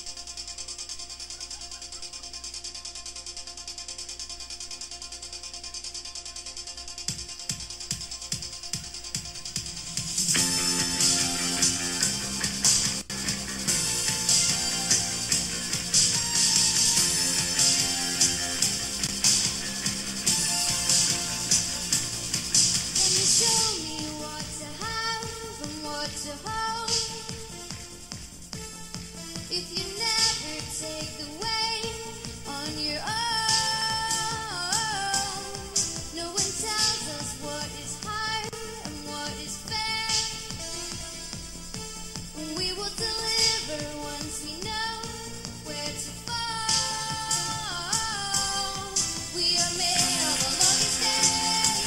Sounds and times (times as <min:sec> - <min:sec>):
Music: 0:00.0 - 0:51.8.